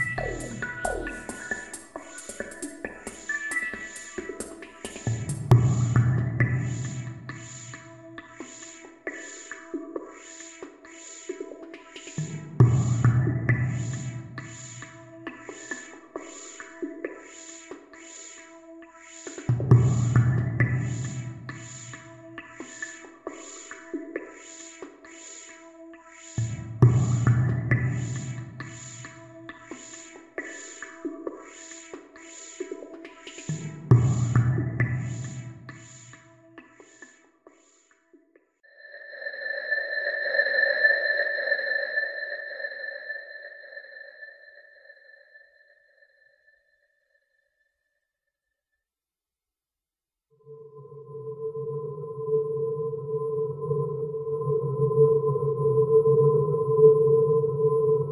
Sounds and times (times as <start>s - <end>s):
Ambient music: 0.0s - 37.0s, 50.7s - 58.1s.